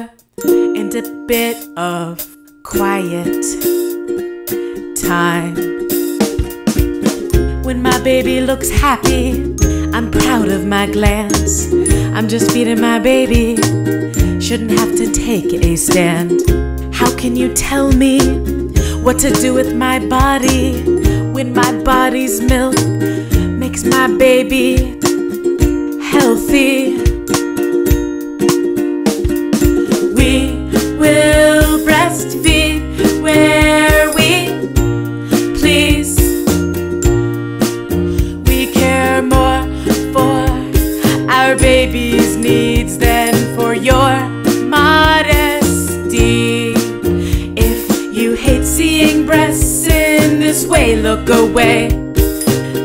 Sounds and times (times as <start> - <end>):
Happy music: 0.0 - 52.8.